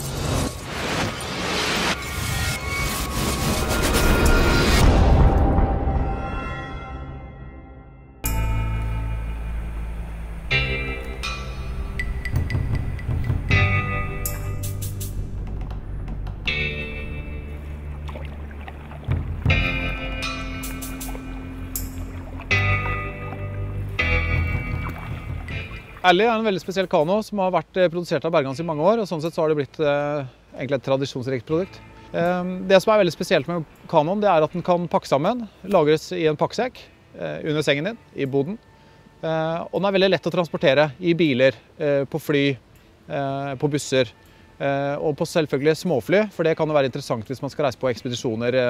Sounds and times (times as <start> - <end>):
Music: 0.0 - 27.2, 31.0 - 48.6
Speech: 26.0 - 38.6, 39.2 - 48.6.